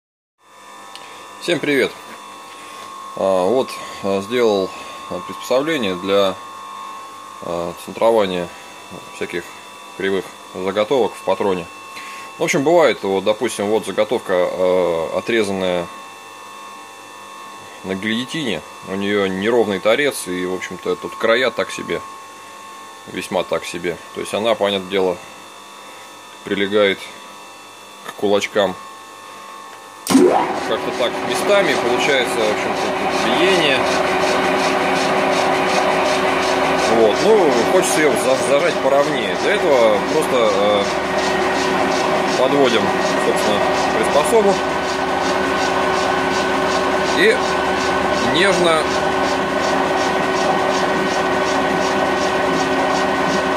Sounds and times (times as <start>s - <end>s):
Speech: 1.4s - 2.0s, 3.2s - 6.4s, 7.4s - 11.7s, 12.4s - 16.0s, 17.8s - 22.0s, 23.1s - 25.2s, 26.4s - 27.2s, 28.0s - 28.8s, 30.6s - 33.9s, 36.9s - 41.0s, 42.4s - 44.6s, 47.1s - 47.5s, 48.2s - 48.9s.